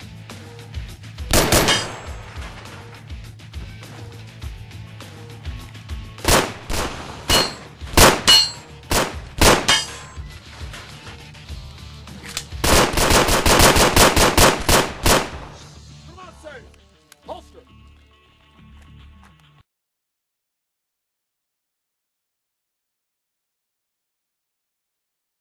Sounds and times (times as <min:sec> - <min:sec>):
Music: 0:00.0 - 0:19.7
Speech: 0:16.1 - 0:17.8.